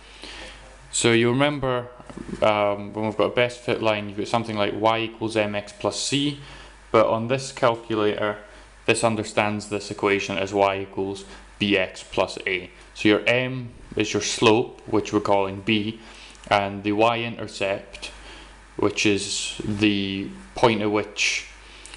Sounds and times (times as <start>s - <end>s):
Speech: 0.9s - 18.2s, 18.8s - 21.6s.